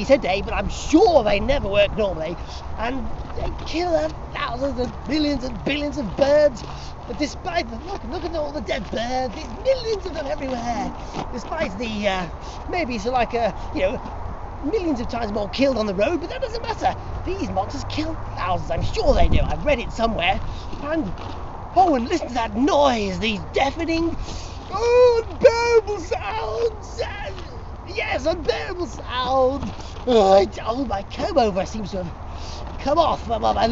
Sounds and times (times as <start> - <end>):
Speech: 0.0 - 21.2, 21.8 - 33.7.